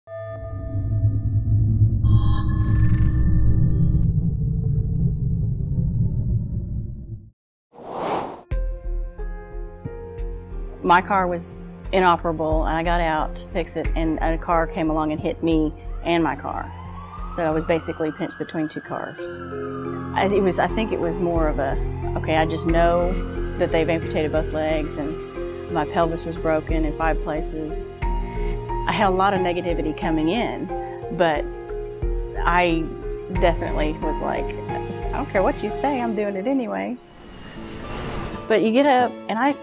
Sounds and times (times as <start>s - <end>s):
Music: 8.4s - 39.6s.